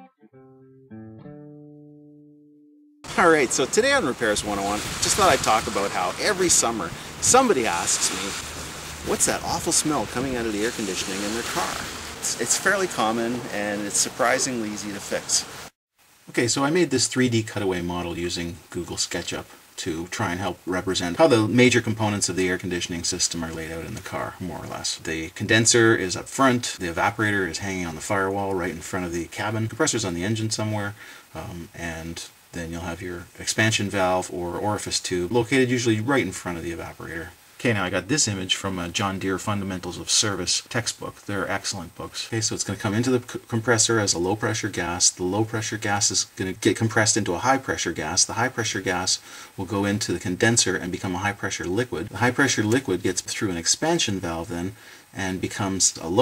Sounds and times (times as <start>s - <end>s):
Speech: 3.1s - 8.4s, 9.0s - 15.5s, 16.3s - 56.2s.